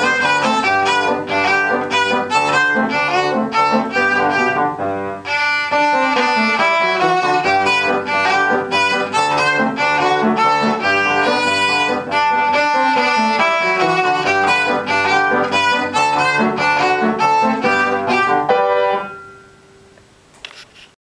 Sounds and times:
Violin, fiddle: 0:00.0 - 0:18.6.

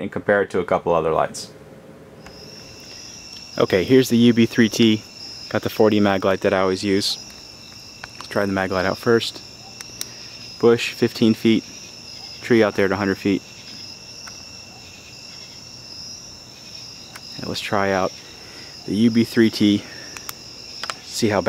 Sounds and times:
Cricket: 0:02.2 - 0:21.4.

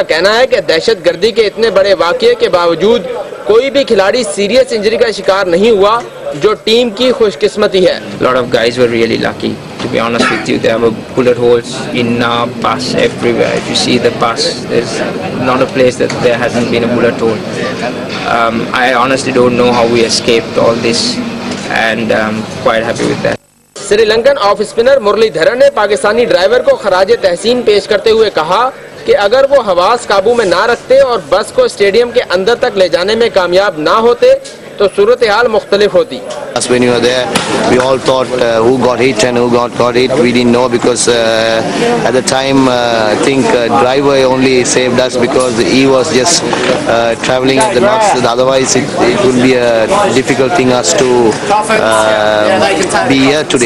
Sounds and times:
Speech: 0:00.0 - 0:53.6.

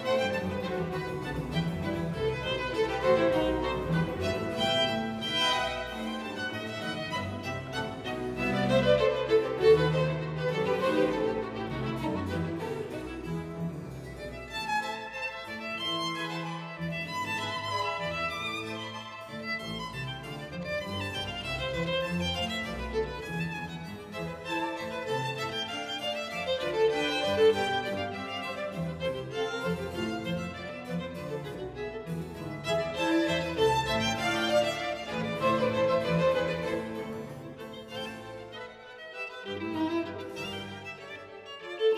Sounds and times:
Violin, fiddle: 0:00.0 - 0:41.9.

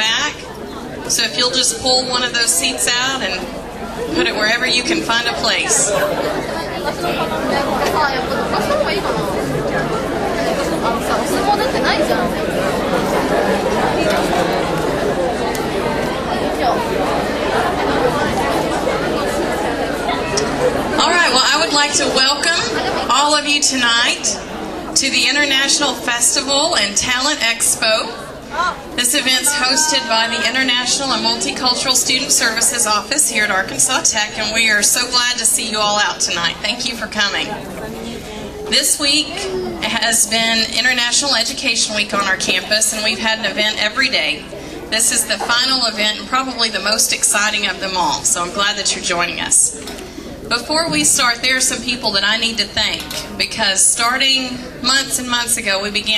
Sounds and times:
Female speech, woman speaking: 0:00.0 - 0:00.5, 0:01.1 - 0:06.1, 0:21.0 - 0:24.4, 0:25.0 - 0:37.7, 0:38.7 - 0:49.8, 0:50.5 - 0:56.1.

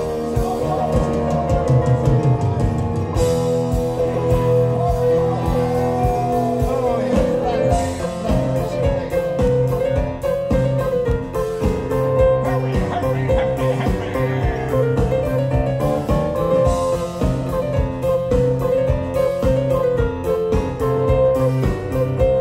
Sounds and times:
Music: 0:00.0 - 0:22.4.

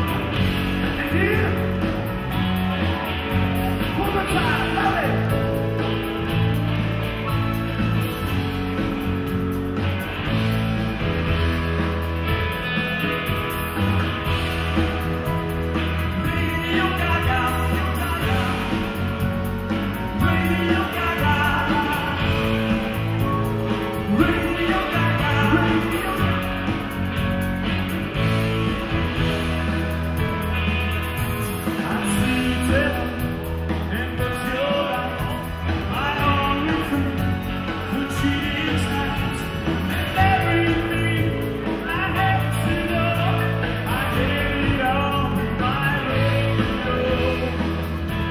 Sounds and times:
Music: 0:00.0 - 0:48.3.

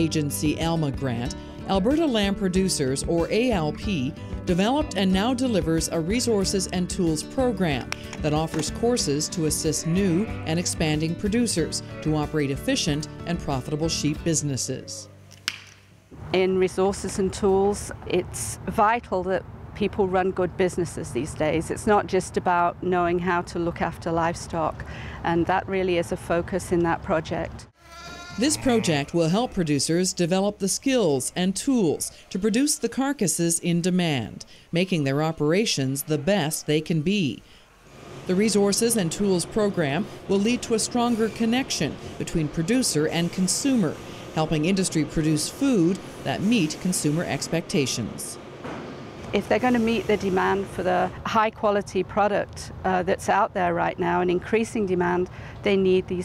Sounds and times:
Speech: 0:00.0 - 0:15.1, 0:16.3 - 0:27.6, 0:28.4 - 0:37.4, 0:38.3 - 0:48.4, 0:49.4 - 0:56.2.

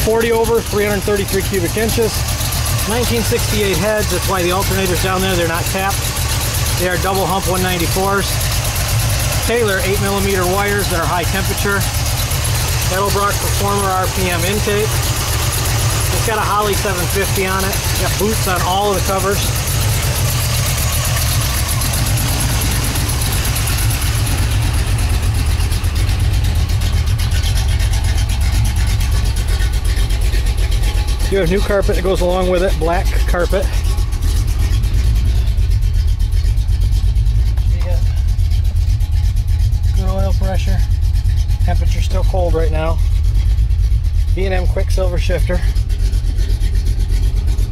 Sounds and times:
Speech: 0:00.0 - 0:02.2, 0:02.8 - 0:06.0, 0:06.7 - 0:08.4, 0:09.4 - 0:11.9, 0:12.8 - 0:15.0, 0:16.1 - 0:19.5, 0:31.2 - 0:33.8, 0:37.7 - 0:38.2, 0:39.9 - 0:40.9, 0:41.7 - 0:43.0, 0:44.3 - 0:45.7.

